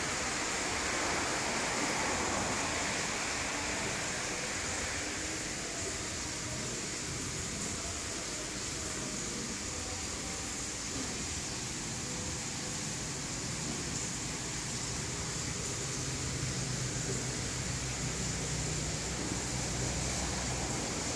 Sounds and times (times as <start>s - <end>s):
Spray: 0.0s - 21.1s.